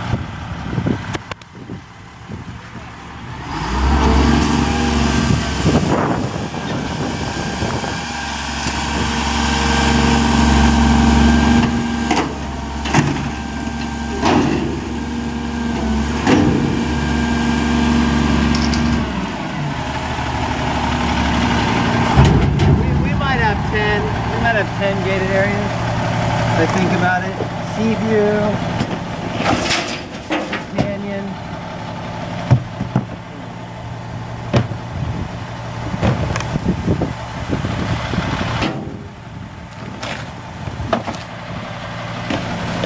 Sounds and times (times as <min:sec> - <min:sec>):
Truck: 0:00.0 - 0:42.8.